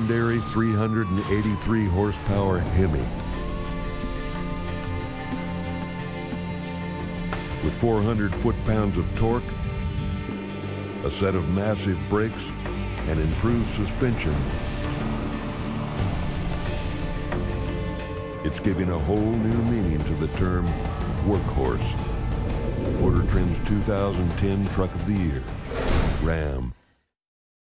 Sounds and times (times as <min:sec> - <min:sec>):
Speech: 0:00.0 - 0:03.2, 0:07.6 - 0:09.5, 0:11.0 - 0:14.5, 0:18.4 - 0:22.0, 0:23.0 - 0:26.8
Music: 0:00.0 - 0:27.2.